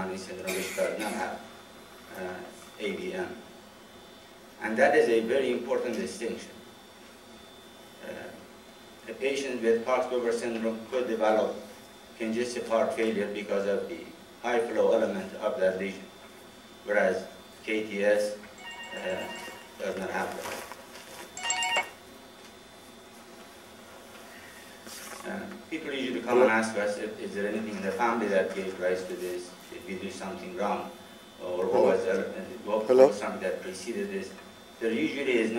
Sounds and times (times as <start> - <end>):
Speech: 0.0 - 1.4, 2.1 - 3.4, 4.6 - 6.6, 8.0 - 8.4, 9.1 - 16.1, 16.9 - 18.4, 19.0 - 20.6, 25.2 - 35.5.